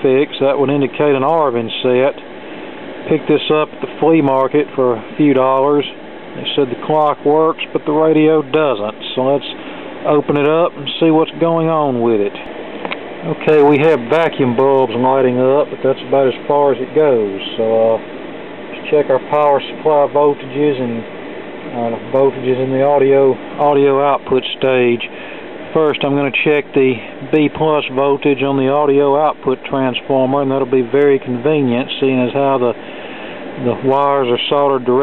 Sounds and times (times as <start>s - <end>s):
Speech: 0.0s - 2.3s, 3.0s - 12.5s, 13.2s - 18.1s, 18.7s - 21.1s, 21.7s - 32.8s, 33.6s - 35.0s.